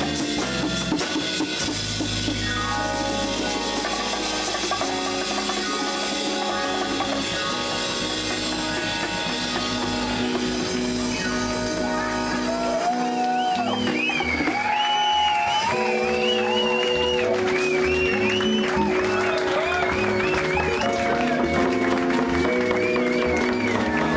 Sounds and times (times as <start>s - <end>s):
Jazz: 0.0s - 24.1s
Percussion: 0.0s - 24.1s.